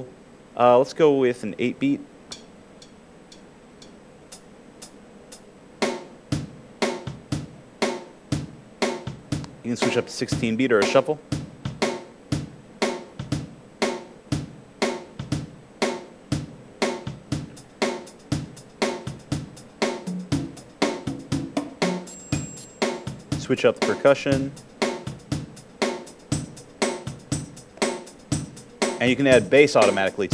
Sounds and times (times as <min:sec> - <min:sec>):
Bass drum: 0:06.4 - 0:07.6, 0:08.4 - 0:10.6, 0:11.2 - 0:12.6, 0:13.2 - 0:13.6, 0:14.3 - 0:14.6, 0:15.2 - 0:15.6, 0:16.3 - 0:17.7, 0:18.3 - 0:30.3.